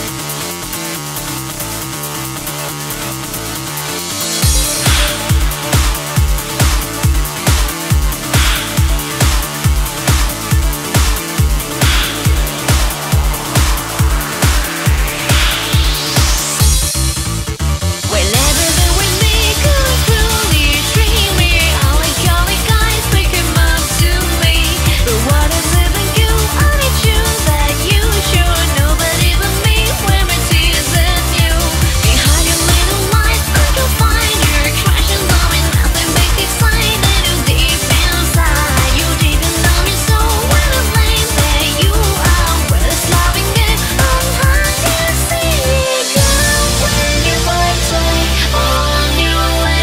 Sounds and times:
Dance music: 0.0 - 49.8.

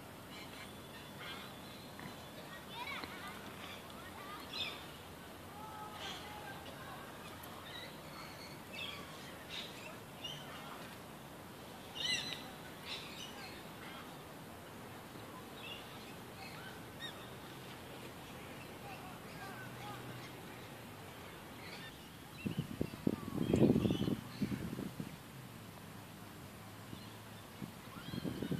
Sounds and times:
Environmental noise: 0.0 - 28.5
Bird: 12.0 - 14.1.

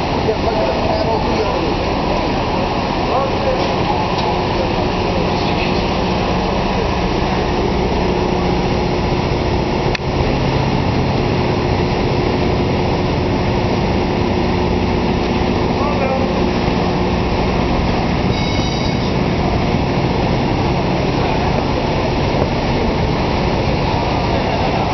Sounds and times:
Boat, Water vehicle: 0.0 - 24.9.

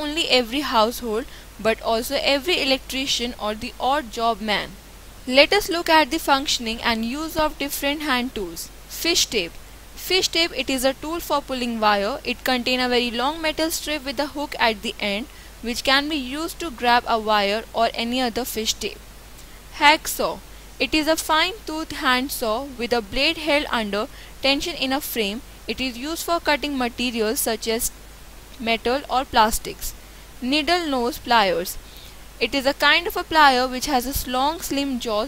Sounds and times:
Speech: 0.0 - 19.0, 19.8 - 27.9, 28.6 - 31.8, 32.4 - 35.2.

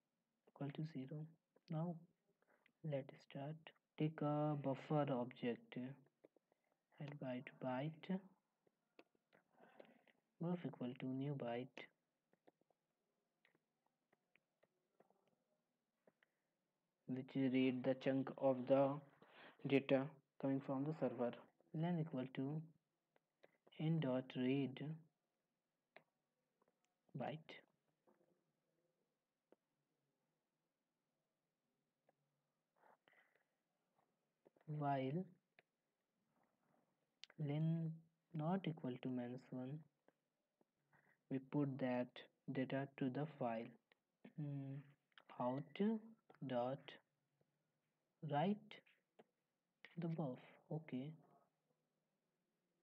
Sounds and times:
Speech: 0.6 - 2.0, 2.8 - 6.1, 7.0 - 8.3, 10.4 - 11.9, 17.1 - 22.7, 23.8 - 25.0, 27.2 - 27.6, 34.7 - 35.3, 37.2 - 39.9, 41.3 - 47.0, 48.2 - 48.8, 49.9 - 51.2.

